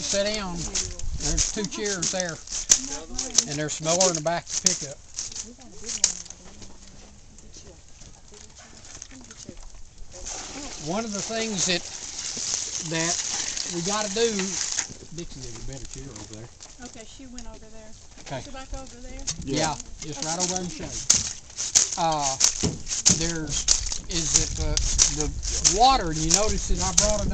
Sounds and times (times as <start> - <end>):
Speech: 18.3 - 21.0.